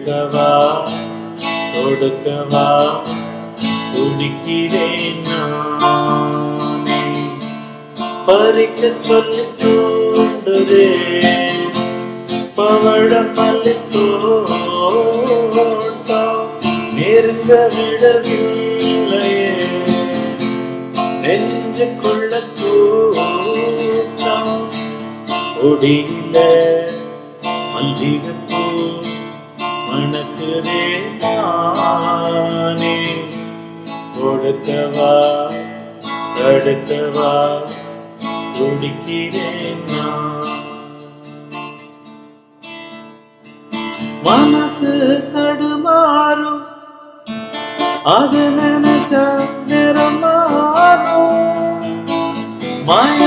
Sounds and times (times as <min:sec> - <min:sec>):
Acoustic guitar: 0:00.0 - 0:53.2.